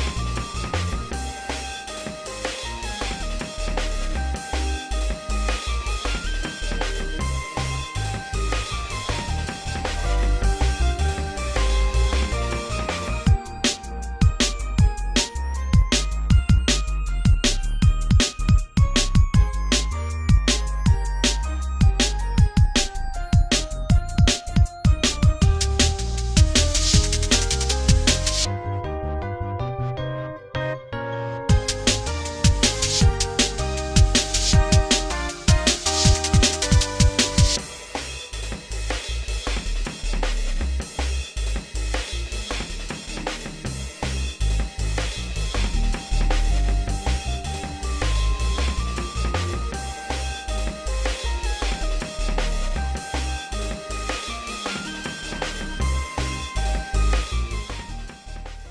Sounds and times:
Bass drum: 0.0s - 28.5s, 31.5s - 58.7s
Drum kit: 0.0s - 28.5s, 31.5s - 58.7s.

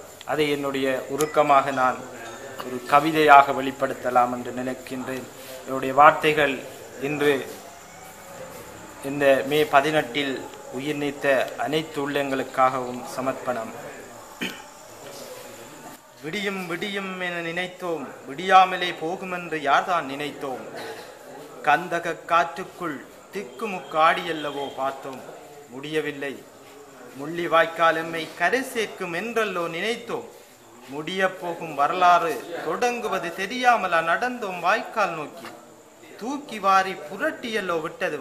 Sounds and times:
Narration, monologue: 0.0s - 14.9s, 27.2s - 38.2s
Male speech, man speaking: 0.3s - 7.7s, 8.4s - 14.2s, 15.0s - 38.2s.

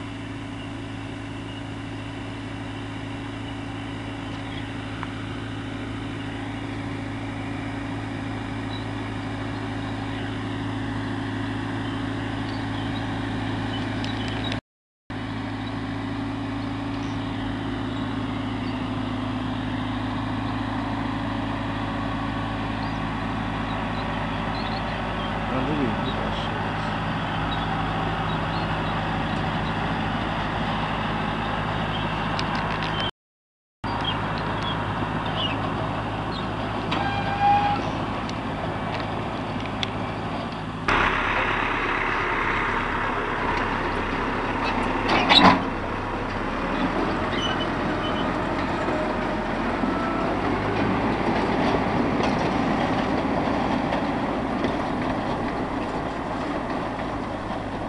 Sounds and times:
Vehicle: 0.0s - 33.1s, 33.8s - 57.8s
Outside, rural or natural: 0.0s - 33.2s, 33.8s - 57.8s.

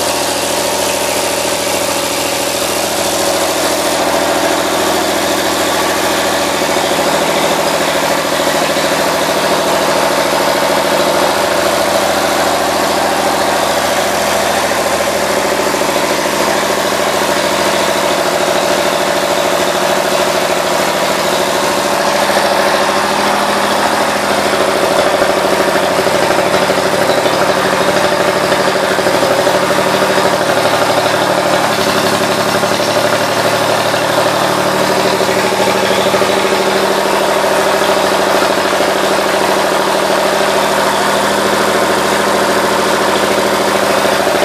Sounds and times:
Engine: 0.0s - 44.4s.

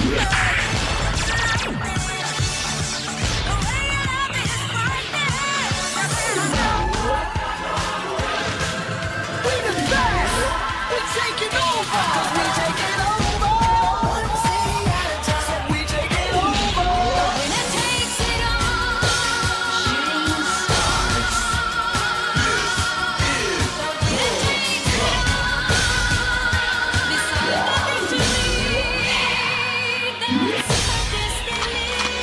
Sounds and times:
Rhythm and blues: 0.0s - 32.2s.

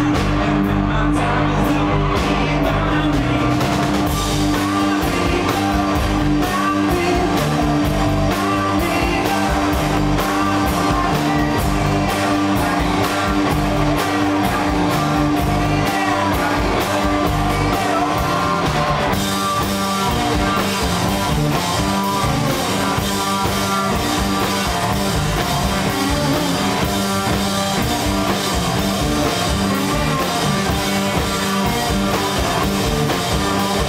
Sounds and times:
Music: 0.0s - 33.8s.

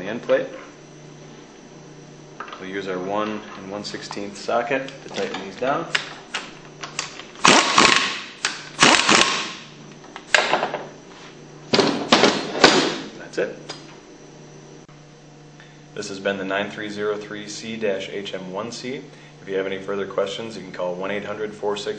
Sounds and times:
Speech: 0.0s - 0.6s, 2.6s - 6.0s, 13.2s - 13.7s, 16.0s - 21.9s.

